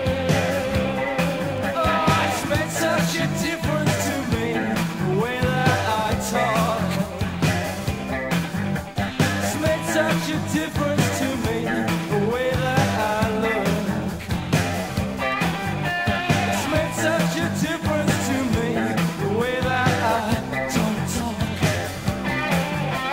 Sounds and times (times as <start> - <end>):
Music: 0.0 - 23.1.